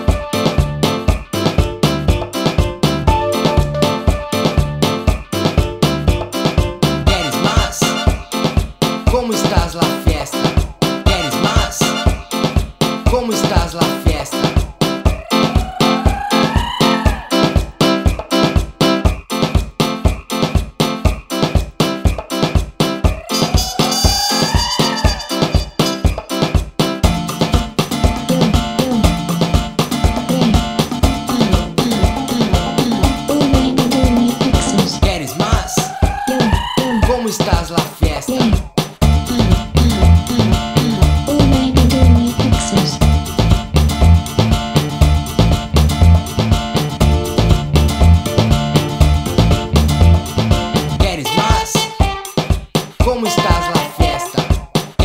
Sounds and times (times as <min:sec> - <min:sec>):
Music: 0:00.0 - 0:55.0.